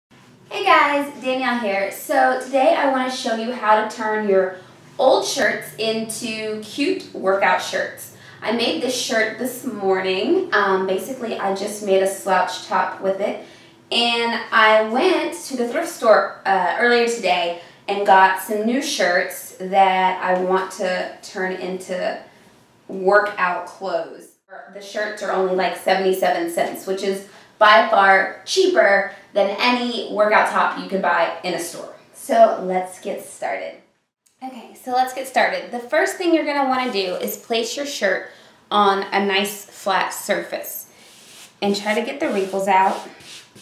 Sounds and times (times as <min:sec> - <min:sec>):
Speech: 0:00.5 - 0:22.2, 0:22.9 - 0:33.8, 0:34.4 - 0:40.9, 0:41.6 - 0:43.1.